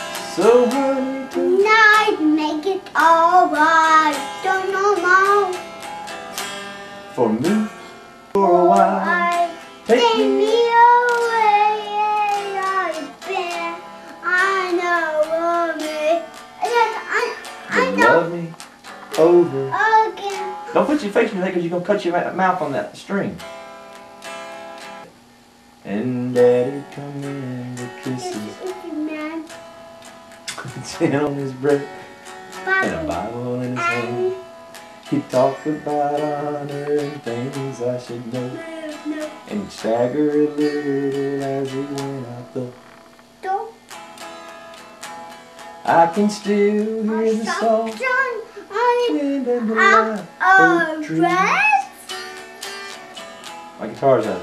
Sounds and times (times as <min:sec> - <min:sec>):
Music: 0:00.0 - 0:22.7, 0:23.4 - 0:25.1, 0:25.8 - 0:54.4
Child singing: 0:00.3 - 0:05.6, 0:08.6 - 0:18.3, 0:19.2 - 0:20.7, 0:28.0 - 0:29.5, 0:32.7 - 0:34.5, 0:35.2 - 0:41.8, 0:45.9 - 0:52.4.